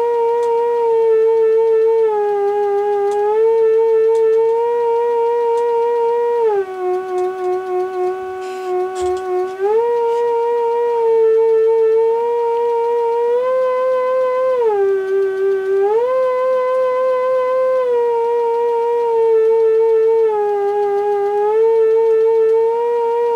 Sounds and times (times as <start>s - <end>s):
Theremin: 0.0s - 23.3s.